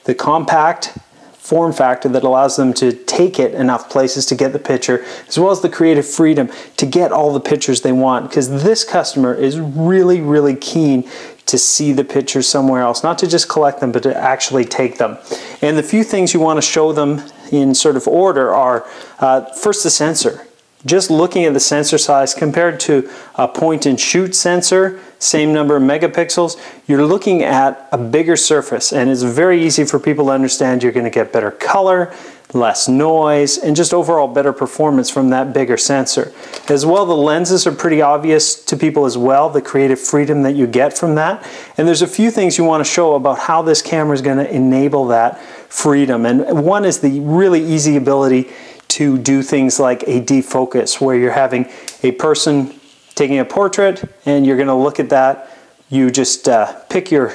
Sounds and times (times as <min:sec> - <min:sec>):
Speech: 0:00.0 - 0:57.3.